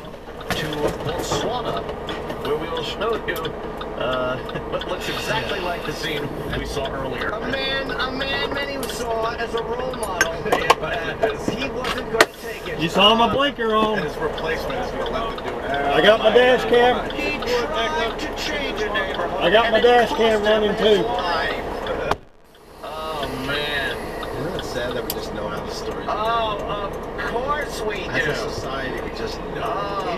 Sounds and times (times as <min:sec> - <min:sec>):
Speech: 0:00.0 - 0:22.2, 0:22.8 - 0:30.1
Vehicle: 0:00.0 - 0:30.1.